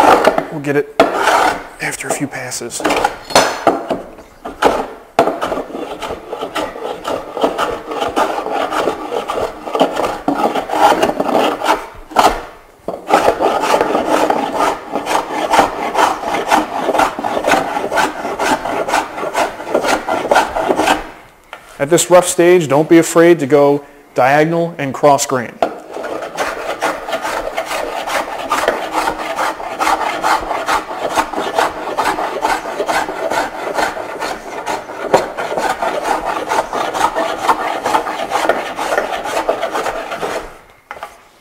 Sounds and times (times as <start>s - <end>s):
Filing (rasp): 0.0s - 1.7s, 4.5s - 21.2s, 25.7s - 41.1s
Wood: 0.0s - 2.2s, 2.8s - 21.1s, 25.6s - 41.2s
Rub: 1.1s - 1.6s, 5.3s - 12.4s, 13.1s - 21.1s, 25.8s - 41.2s.